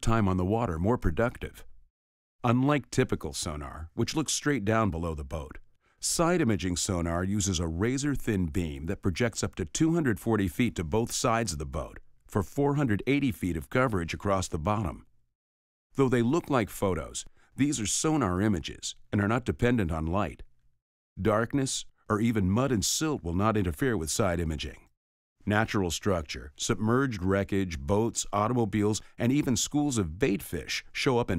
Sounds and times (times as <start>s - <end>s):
Speech: 0.0s - 1.7s, 2.4s - 15.1s, 16.0s - 20.5s, 21.2s - 31.3s.